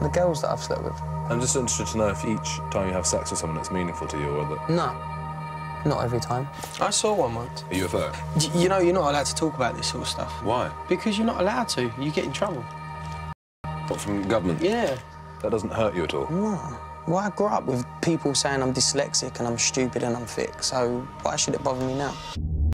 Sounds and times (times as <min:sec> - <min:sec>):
Music: 0:00.0 - 0:22.7.